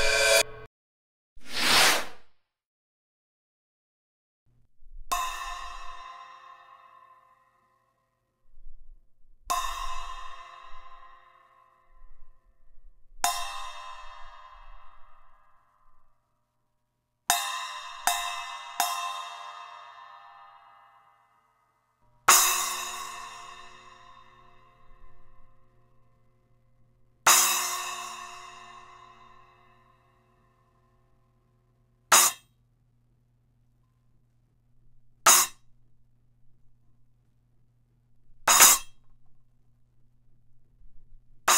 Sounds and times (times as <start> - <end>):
Music: 0.0 - 0.7, 4.5 - 32.4.